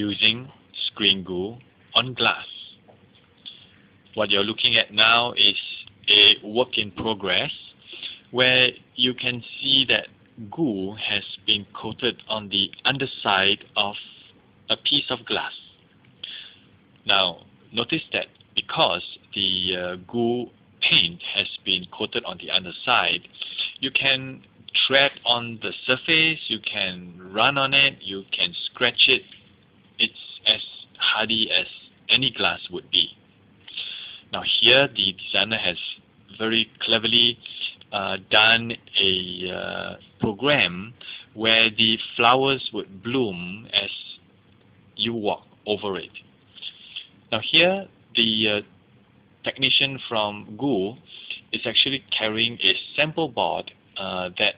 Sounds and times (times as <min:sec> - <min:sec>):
Speech: 0:00.0 - 0:02.9, 0:04.2 - 0:29.4, 0:30.0 - 0:33.2, 0:33.8 - 0:44.3, 0:45.0 - 0:48.7, 0:49.4 - 0:54.5.